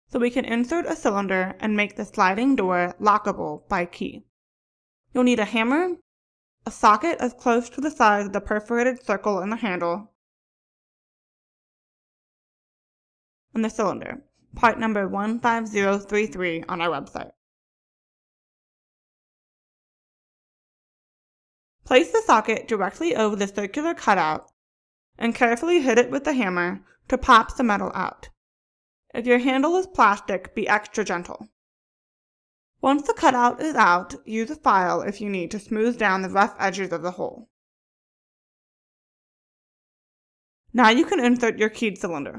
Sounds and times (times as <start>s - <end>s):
Speech: 0.1s - 4.3s, 5.2s - 6.0s, 6.7s - 10.1s, 13.6s - 17.4s, 21.9s - 24.5s, 25.2s - 28.3s, 29.1s - 31.5s, 32.8s - 37.5s, 40.8s - 42.3s.